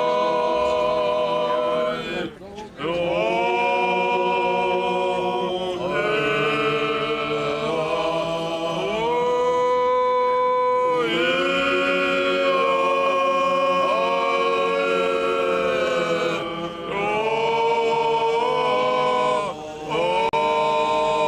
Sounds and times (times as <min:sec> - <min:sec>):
Chant: 0:00.0 - 0:21.2.